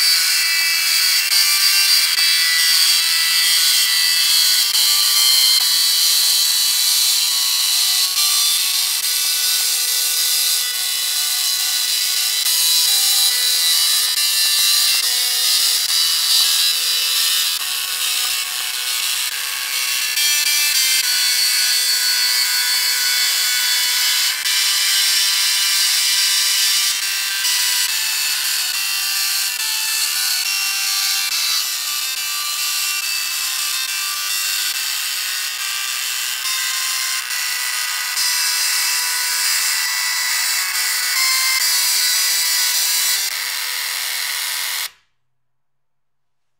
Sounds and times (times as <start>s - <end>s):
Music: 0.0s - 45.0s
Printer: 0.0s - 45.0s.